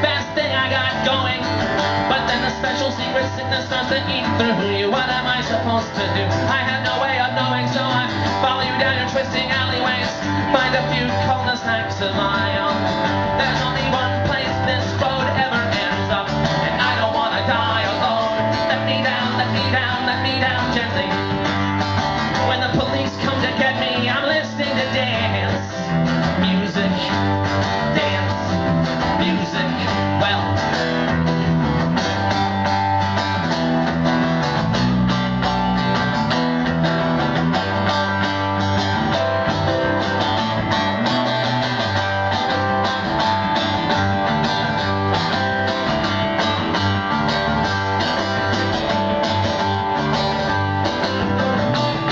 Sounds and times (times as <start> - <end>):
Soul music: 0.0 - 52.1.